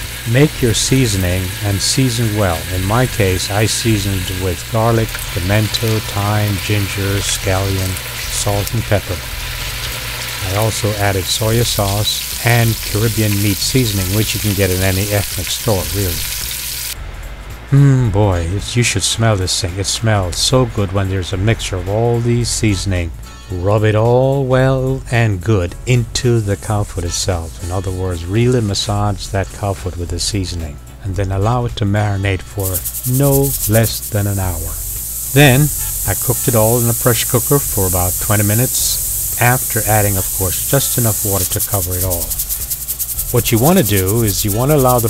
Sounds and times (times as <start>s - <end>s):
Frying (food): 0.0s - 17.0s, 32.6s - 45.0s
Speech: 0.3s - 9.2s, 10.4s - 16.2s, 17.8s - 34.8s, 35.4s - 42.4s, 43.4s - 45.0s.